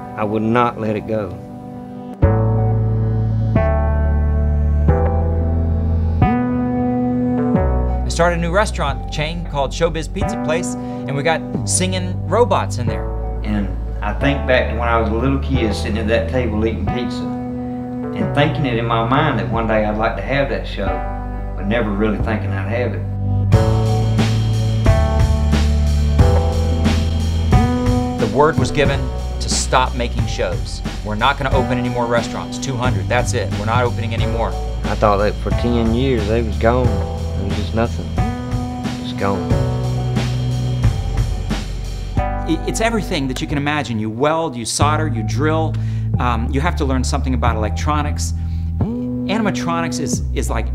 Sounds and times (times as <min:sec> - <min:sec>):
Music: 0:00.0 - 0:50.7
Speech: 0:00.2 - 0:01.4, 0:08.1 - 0:17.3, 0:18.2 - 0:21.0, 0:21.6 - 0:23.0, 0:28.2 - 0:38.1, 0:39.1 - 0:39.6, 0:42.5 - 0:50.7.